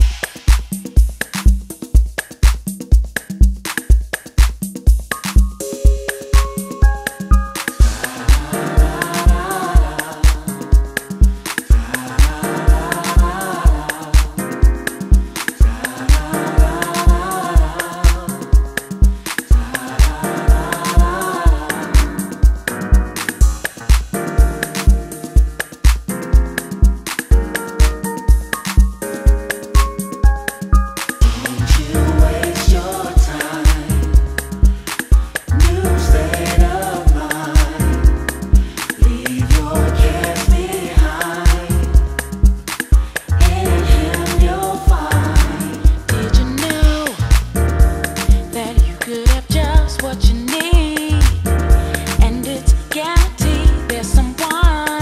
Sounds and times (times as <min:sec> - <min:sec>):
Music: 0:00.0 - 0:55.0.